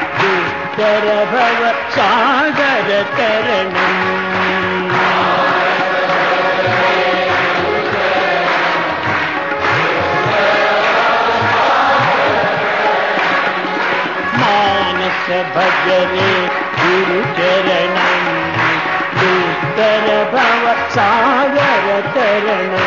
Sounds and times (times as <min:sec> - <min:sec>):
Male singing: 0:00.0 - 0:06.9, 0:14.3 - 0:22.8
Music: 0:00.0 - 0:22.8.